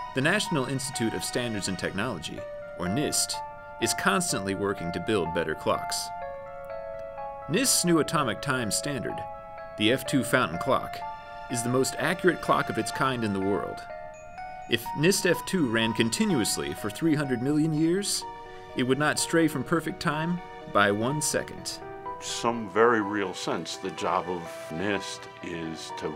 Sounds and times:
Music: 0.0 - 26.1
Speech: 0.2 - 6.1, 9.8 - 13.8, 14.7 - 18.2, 18.8 - 26.1.

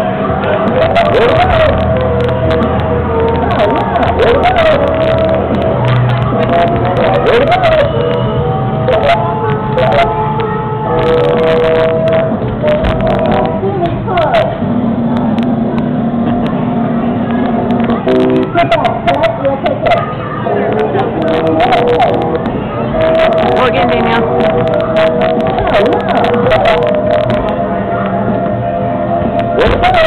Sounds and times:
Music: 0.0 - 30.0
Speech: 23.3 - 24.3.

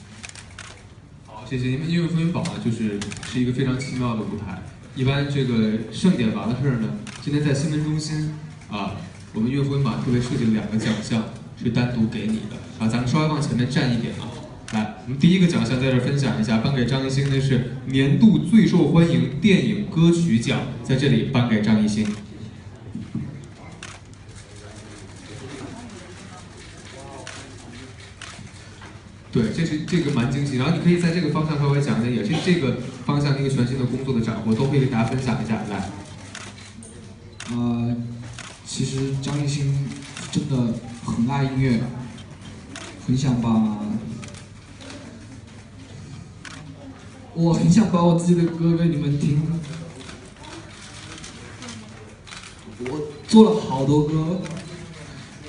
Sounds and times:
Speech: 1.3 - 22.6, 23.2 - 28.3, 29.3 - 45.5, 46.4 - 55.4.

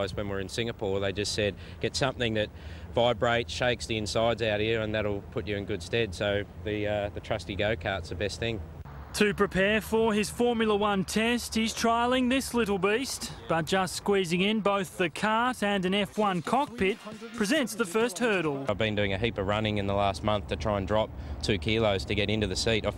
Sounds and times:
Speech: 0.0 - 8.6, 9.2 - 22.9.

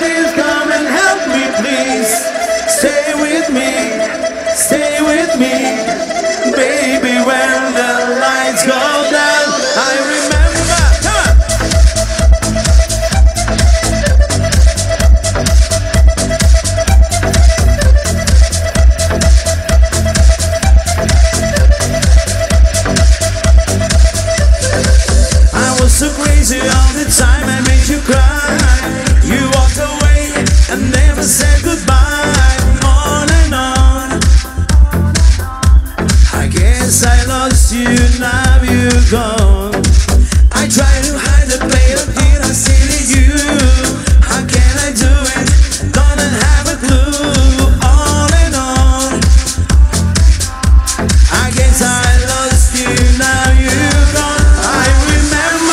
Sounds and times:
Disco: 0.0 - 55.7.

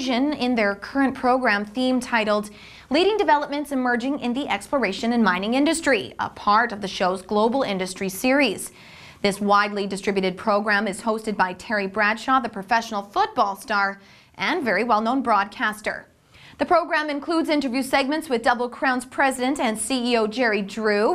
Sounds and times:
Speech: 0.0 - 21.1.

